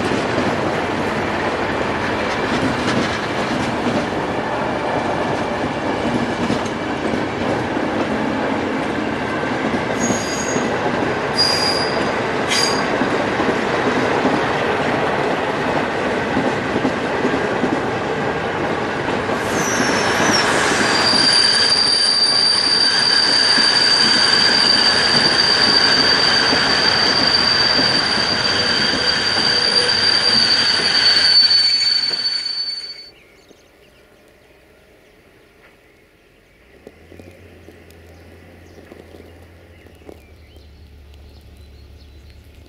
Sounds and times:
Railroad car, train wagon: 0:00.0 - 0:42.6
Train: 0:00.0 - 0:42.6
Clickety-clack: 0:02.1 - 0:04.2, 0:05.2 - 0:08.2, 0:11.9 - 0:17.9
Train wheels squealing: 0:09.9 - 0:13.0, 0:19.4 - 0:33.2.

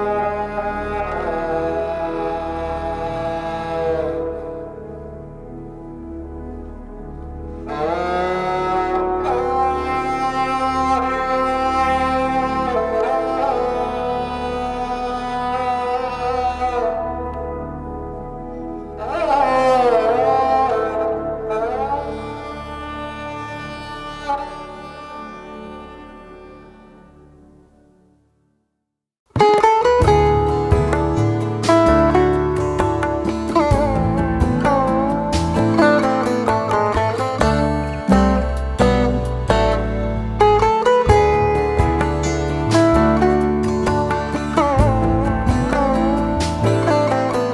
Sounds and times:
Bowed string instrument: 0:00.0 - 0:28.3, 0:29.3 - 0:47.5.

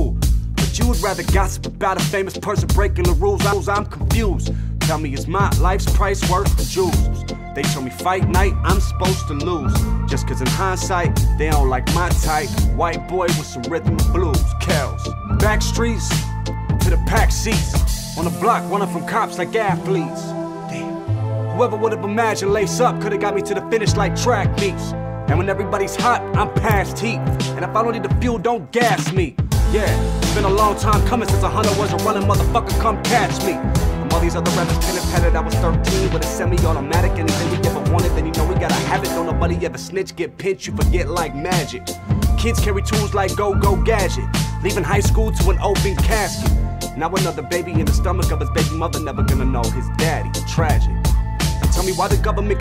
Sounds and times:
Music: 0:00.0 - 0:52.6.

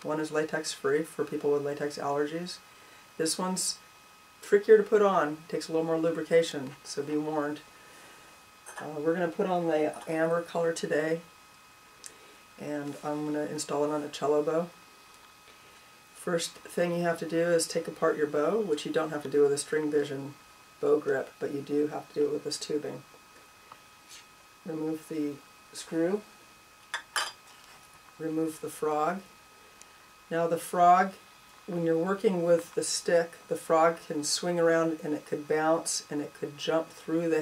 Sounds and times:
Speech: 0:00.0 - 0:02.6, 0:03.2 - 0:03.8, 0:04.4 - 0:07.7, 0:08.7 - 0:11.3, 0:12.6 - 0:14.8, 0:16.2 - 0:23.1, 0:24.6 - 0:26.3, 0:28.2 - 0:29.3, 0:30.3 - 0:37.4.

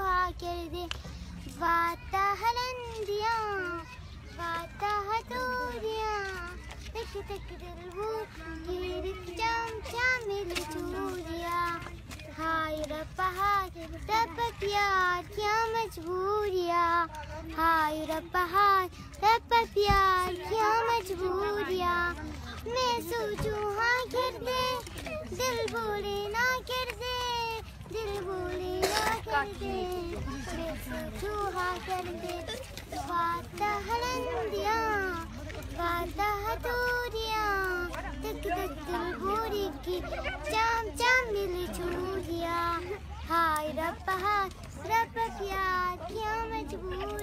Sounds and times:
Speech: 0:01.4 - 0:47.2.

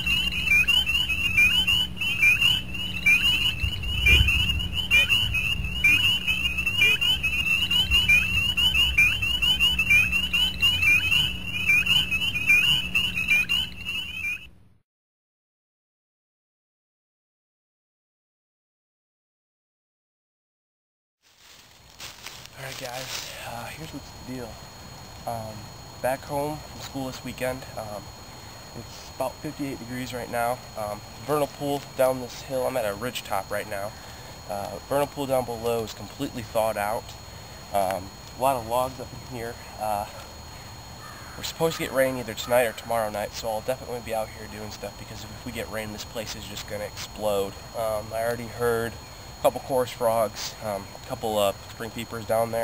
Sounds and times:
Animal: 0:00.0 - 0:14.3, 0:41.0 - 0:47.5.

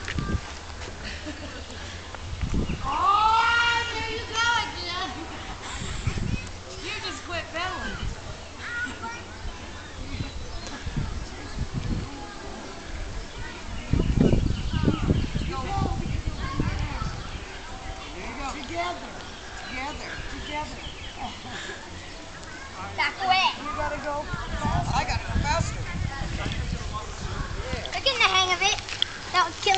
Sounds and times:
Bicycle: 0:27.6 - 0:29.7.

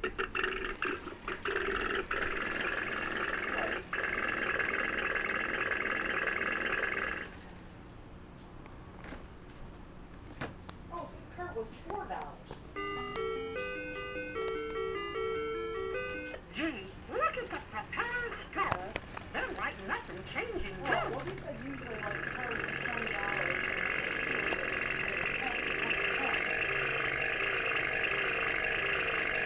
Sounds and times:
Speech: 0:10.9 - 0:12.8, 0:16.5 - 0:23.7, 0:24.4 - 0:26.5
Music: 0:12.8 - 0:16.4.

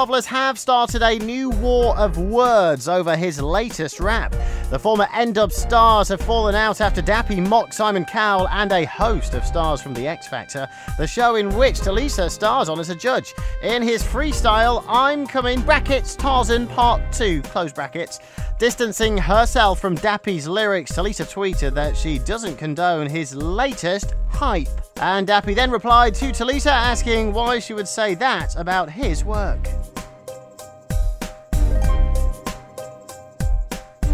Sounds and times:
Speech: 0:00.0 - 0:29.7
Music: 0:00.0 - 0:34.1.

